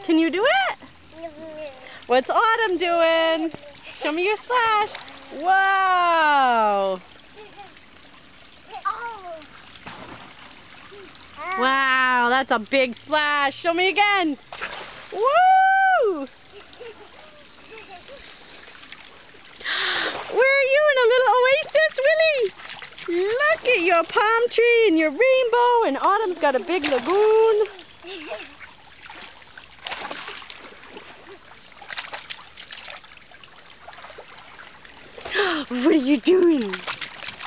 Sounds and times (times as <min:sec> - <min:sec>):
Water: 0:00.0 - 0:37.4.